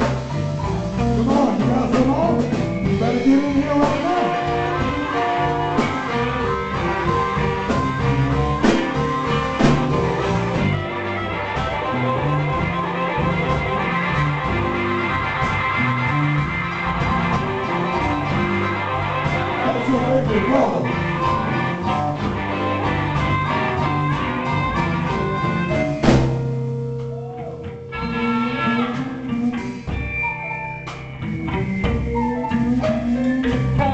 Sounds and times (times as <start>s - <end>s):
Blues: 0.0s - 33.9s.